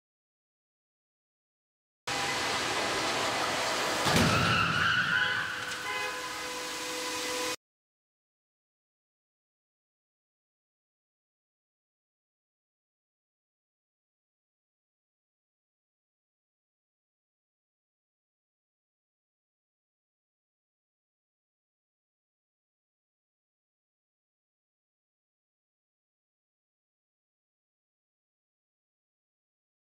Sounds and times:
Car: 2.1s - 7.6s
Inside, large room or hall: 2.1s - 7.6s.

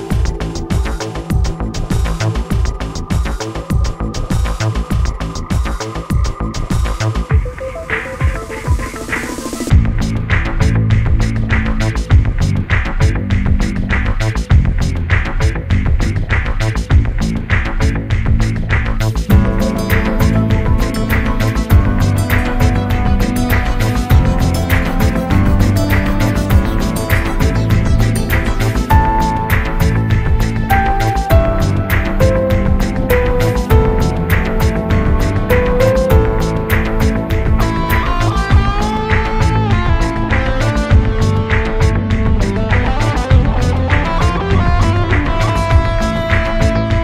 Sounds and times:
Music: 0.0s - 47.0s.

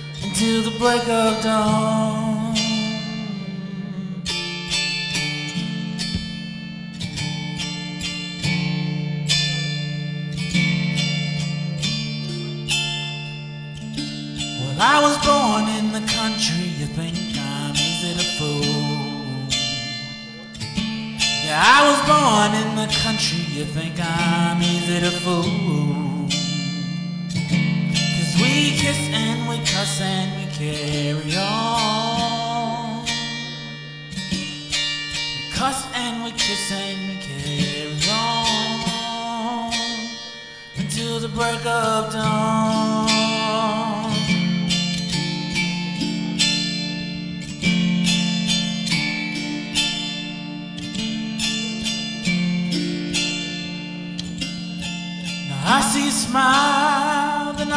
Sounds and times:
Tapping (guitar technique): 0.0s - 57.7s.

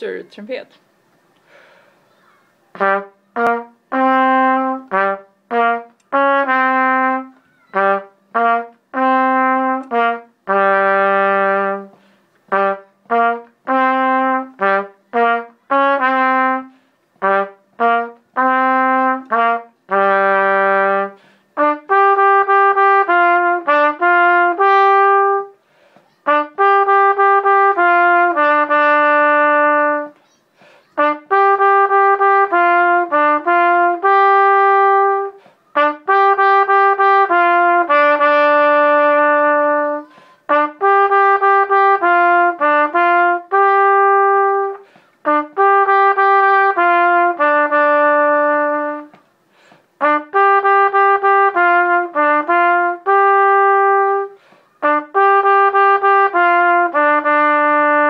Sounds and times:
Trumpet: 2.7s - 58.1s.

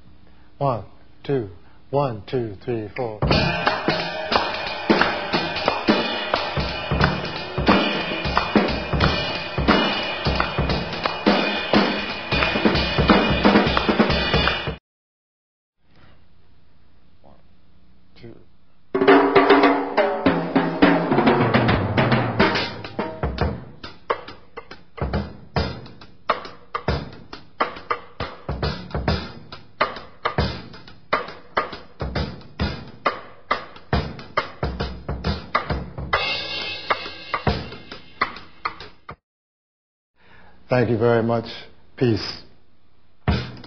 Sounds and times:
Bass drum: 3.2s - 14.8s, 21.2s - 24.3s, 43.3s - 43.6s
Drum kit: 3.2s - 14.8s, 19.0s - 39.2s, 43.2s - 43.6s.

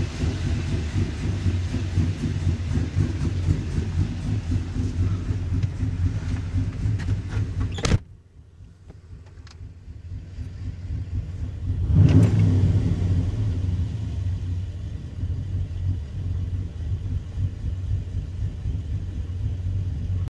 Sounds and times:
Car: 0.0s - 20.3s.

